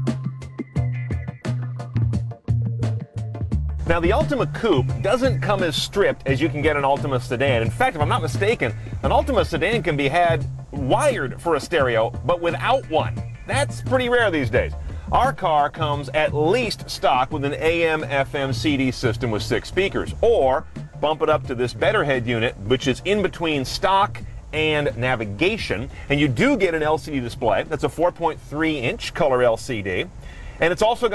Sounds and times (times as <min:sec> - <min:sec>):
Music: 0:00.0 - 0:31.1
Speech: 0:03.9 - 0:31.1.